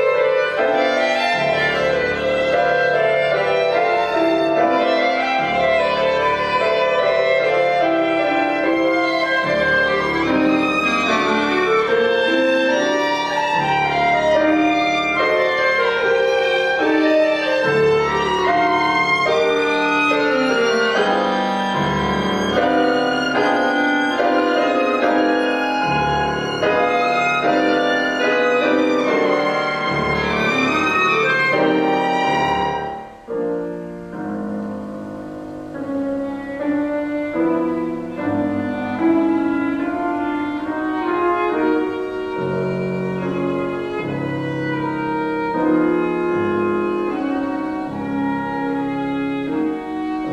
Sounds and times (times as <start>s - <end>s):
Violin, fiddle: 0.0s - 33.6s, 36.2s - 50.3s.